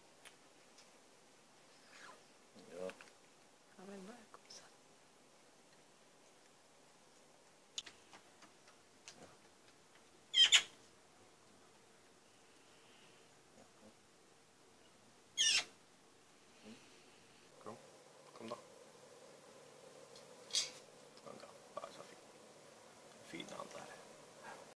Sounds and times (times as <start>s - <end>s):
Speech: 23.2s - 24.0s.